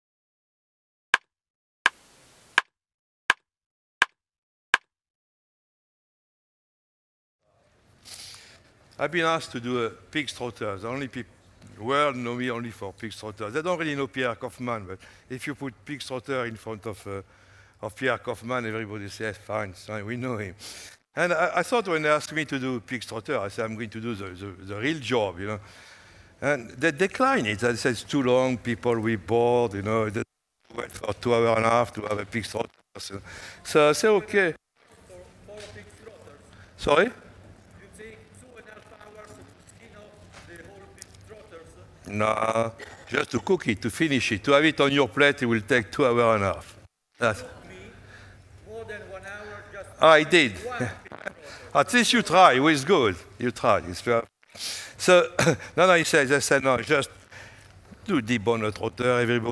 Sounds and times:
Speech: 9.0s - 17.2s, 17.8s - 20.6s, 21.2s - 25.6s, 26.4s - 37.2s, 37.8s - 48.0s, 48.6s - 54.3s, 55.0s - 57.2s, 58.0s - 59.5s.

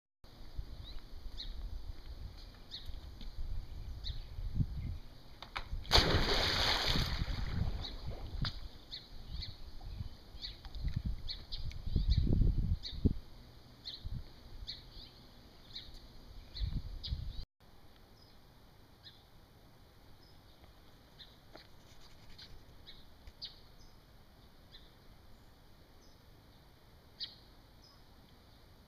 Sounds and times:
Water: 5.4s - 11.8s.

